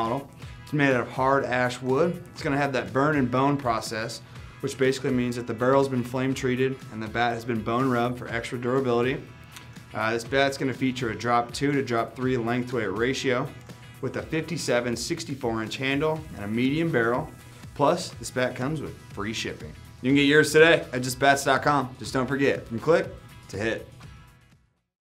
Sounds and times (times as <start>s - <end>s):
Speech: 0.0s - 9.2s, 9.9s - 23.9s
Music: 0.0s - 24.9s.